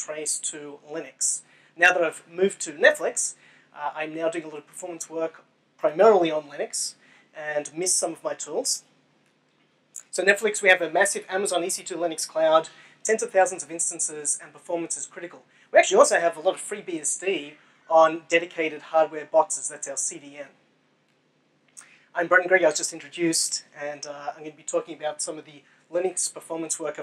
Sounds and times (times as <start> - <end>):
Speech: 0.0 - 8.8, 10.0 - 20.6, 22.1 - 27.0.